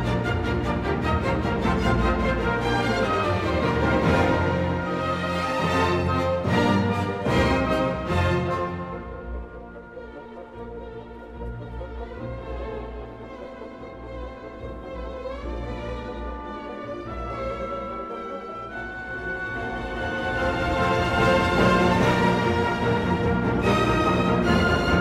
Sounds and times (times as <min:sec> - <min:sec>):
Music: 0:00.0 - 0:25.0.